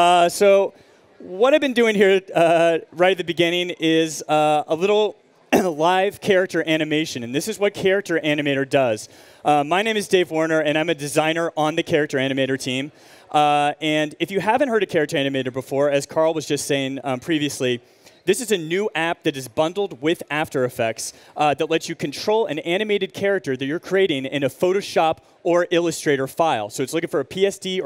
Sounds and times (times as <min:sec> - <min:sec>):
Speech: 0:00.0 - 0:27.8.